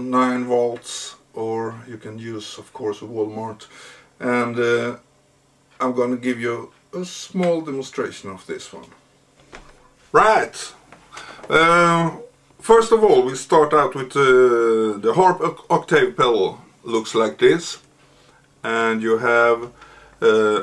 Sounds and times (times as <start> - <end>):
Speech: 0.0 - 5.0, 5.8 - 9.0, 10.1 - 10.8, 11.5 - 17.9, 18.6 - 20.6.